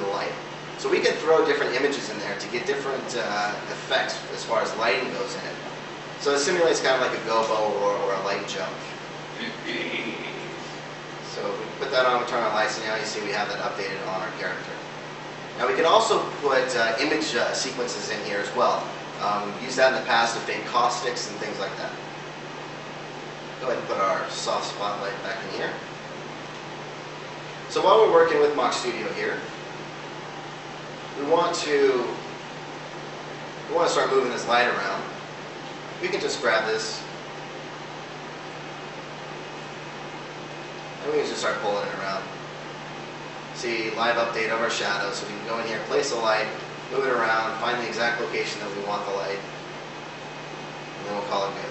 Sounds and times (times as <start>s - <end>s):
Speech: 0.0s - 10.5s, 11.2s - 14.9s, 15.6s - 22.0s, 23.6s - 25.9s, 27.7s - 29.5s, 31.2s - 32.3s, 33.7s - 35.2s, 36.0s - 37.2s, 41.0s - 42.4s, 43.6s - 49.5s, 51.0s - 51.7s.